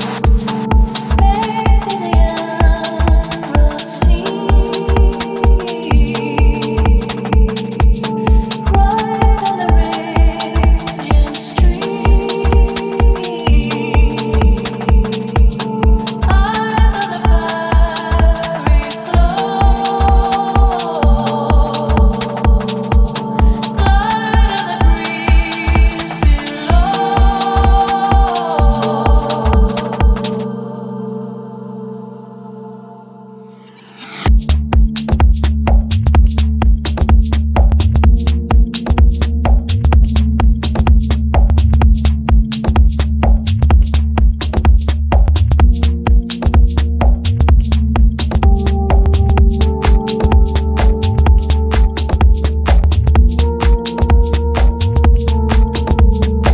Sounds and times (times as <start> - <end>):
Music: 0.0 - 56.5.